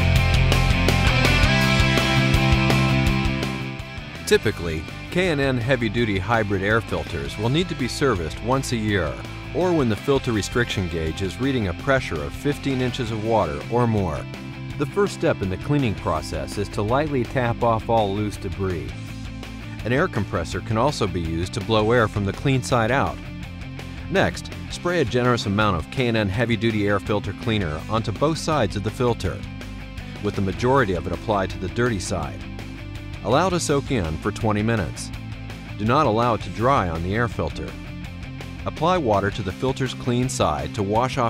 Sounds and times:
Music: 0:00.0 - 0:41.3
Speech: 0:04.3 - 0:19.0, 0:19.8 - 0:23.2, 0:24.1 - 0:29.5, 0:30.2 - 0:32.4, 0:33.2 - 0:35.1, 0:35.8 - 0:37.8, 0:38.6 - 0:41.3.

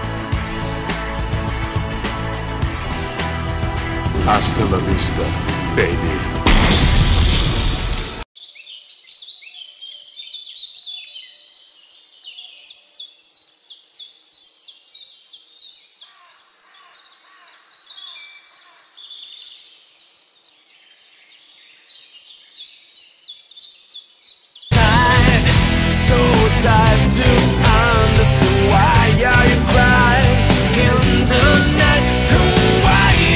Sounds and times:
Music: 0:00.0 - 0:08.2, 0:24.7 - 0:33.3.

